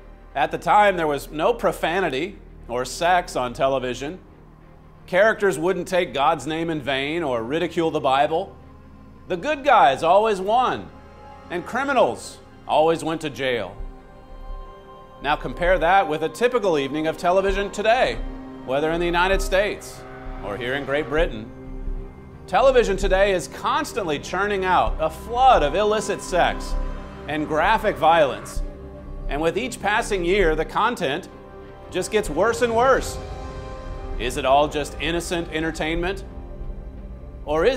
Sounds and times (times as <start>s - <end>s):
Music: 0.0s - 37.7s
Speech: 0.4s - 4.2s, 5.1s - 8.5s, 9.3s - 10.9s, 11.5s - 13.8s, 15.2s - 21.5s, 22.5s - 28.6s, 29.3s - 31.3s, 31.9s - 33.2s, 34.2s - 36.2s, 37.5s - 37.7s.